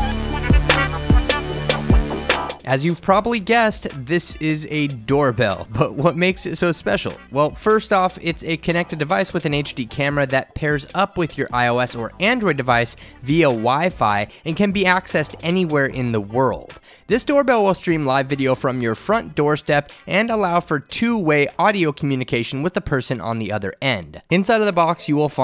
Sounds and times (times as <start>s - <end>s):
Music: 0.0s - 25.4s
Speech: 2.6s - 25.4s.